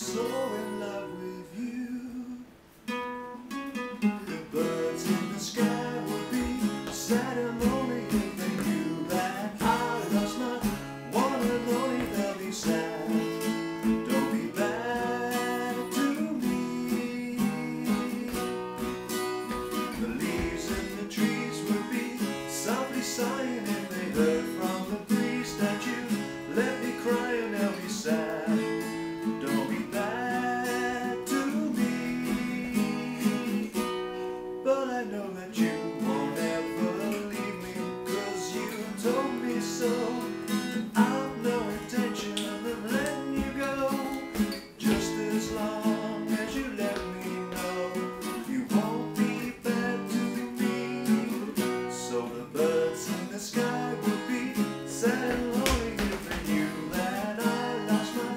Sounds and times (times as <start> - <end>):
Acoustic guitar: 0.0 - 58.3.